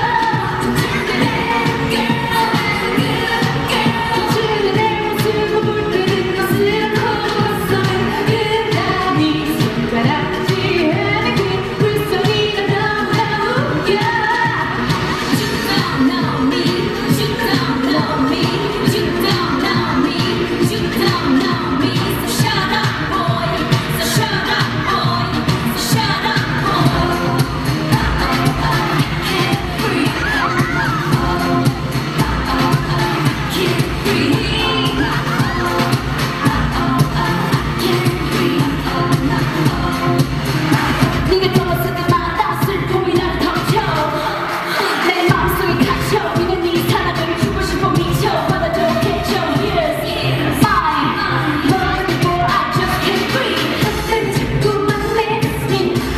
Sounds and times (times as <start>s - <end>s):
Dance music: 0.0s - 56.1s
Soul music: 0.0s - 56.1s
Tender music: 0.0s - 56.1s.